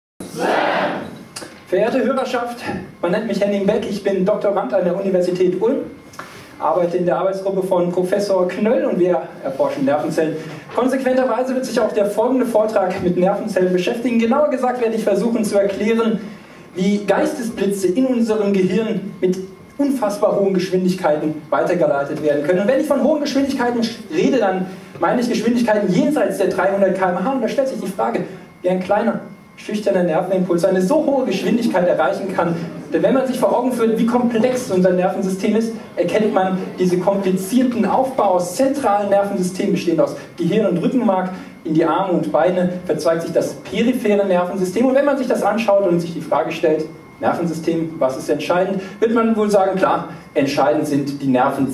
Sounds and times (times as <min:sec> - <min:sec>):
Speech: 0:00.2 - 0:06.0, 0:06.6 - 0:51.7.